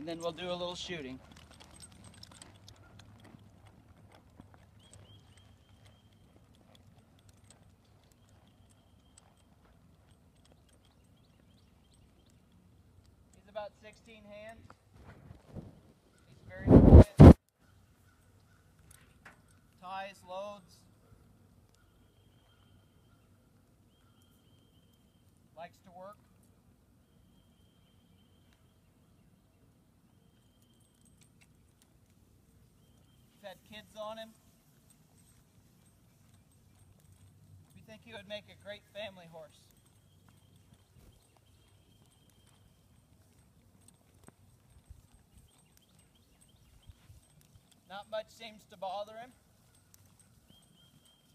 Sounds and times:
Speech: 0.0 - 1.2, 13.4 - 14.7, 19.8 - 20.9, 25.6 - 26.2, 33.4 - 34.4, 37.8 - 39.7, 47.9 - 49.4
Clip-clop: 0.0 - 51.3.

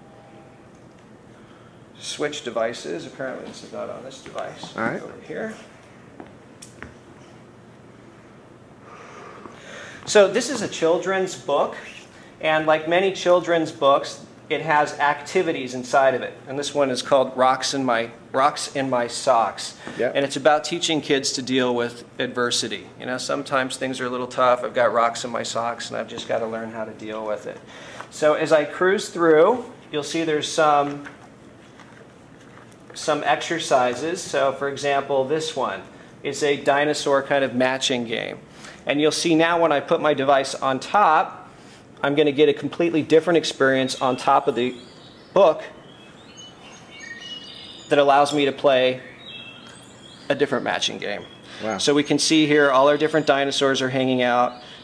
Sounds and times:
Speech: 2.0 - 5.7, 10.1 - 31.1, 33.0 - 44.8, 50.3 - 54.6.

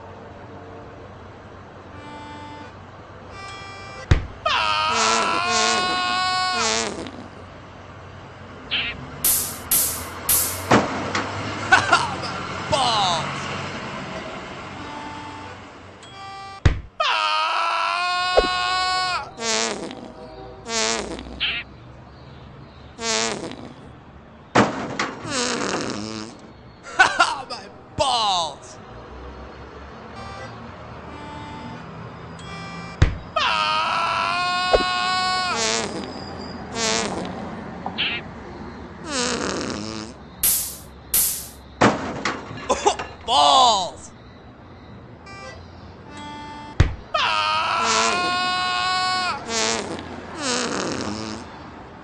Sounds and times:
Speech: 12.7 - 13.5, 27.4 - 28.8, 43.3 - 44.1.

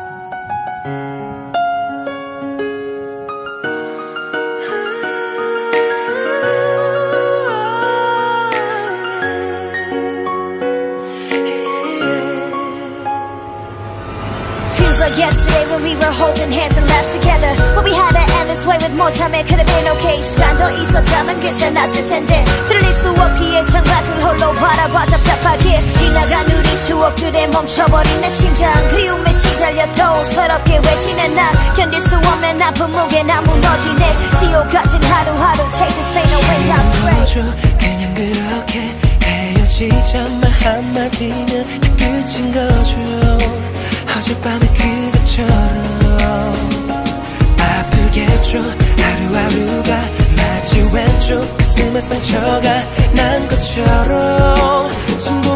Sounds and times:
Music: 0.0 - 55.5.

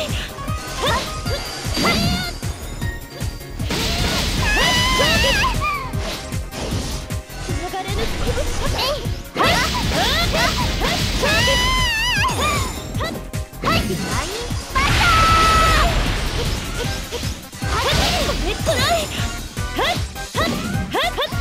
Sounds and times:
Music: 0.0 - 21.4
Speech: 7.6 - 10.5, 17.7 - 19.2, 19.8 - 21.4.

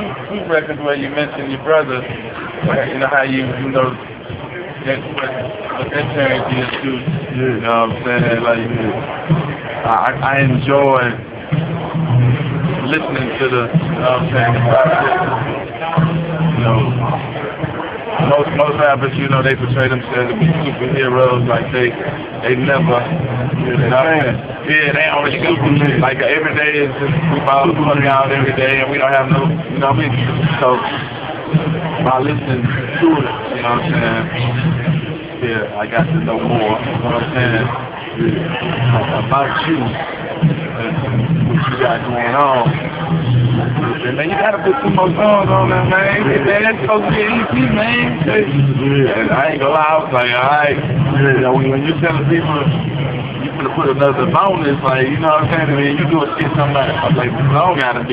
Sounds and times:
Speech: 0.0 - 4.0, 4.8 - 9.1, 9.8 - 11.2, 12.7 - 17.2, 18.2 - 31.1, 31.9 - 34.6, 35.4 - 43.1, 43.7 - 52.8, 53.4 - 58.1
Inside, large room or hall: 0.0 - 58.1.

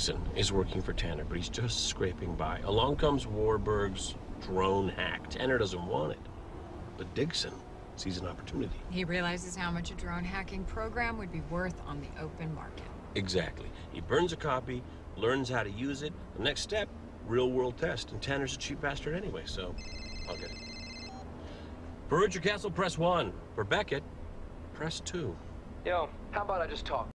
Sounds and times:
Speech: 0.0 - 6.2, 7.0 - 19.8
Vehicle: 0.0 - 27.1.

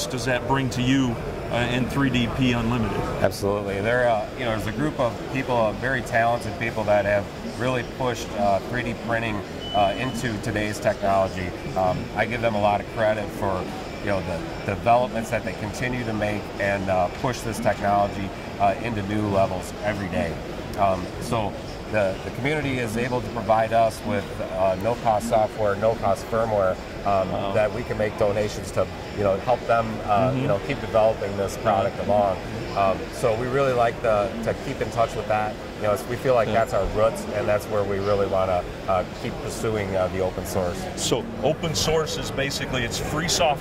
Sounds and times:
Speech: 0.0 - 43.6.

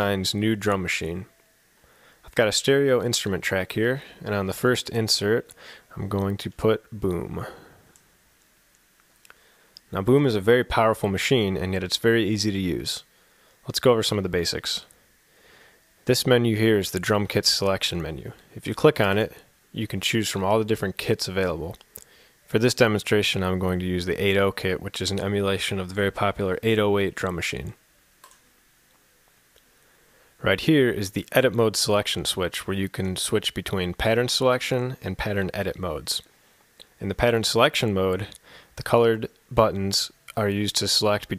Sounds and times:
Speech: 0.0 - 1.3, 2.2 - 7.8, 9.9 - 14.9, 16.0 - 21.8, 22.5 - 27.8, 30.4 - 36.3, 37.0 - 41.3.

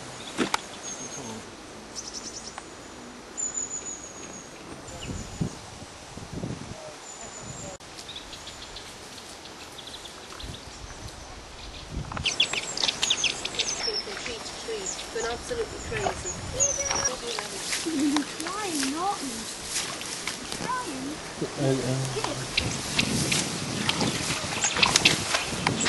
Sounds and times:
Speech: 13.6 - 19.4, 20.6 - 22.7.

